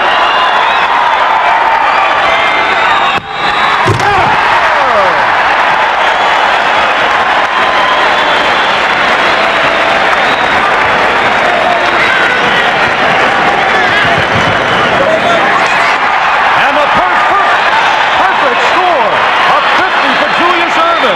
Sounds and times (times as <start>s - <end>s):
Slam: 3.2s - 4.4s.